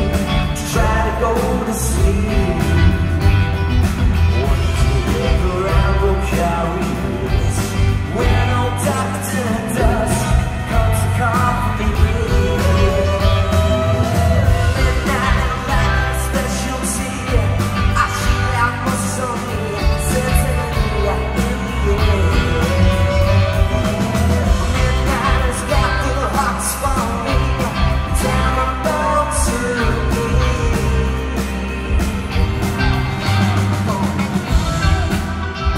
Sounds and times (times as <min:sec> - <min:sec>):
Music: 0:00.0 - 0:35.7
Singing: 0:04.3 - 0:35.7.